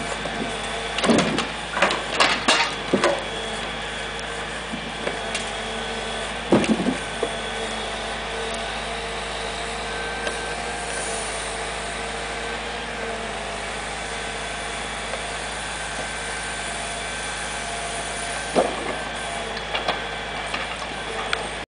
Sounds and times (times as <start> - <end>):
Vehicle: 0.0 - 21.6.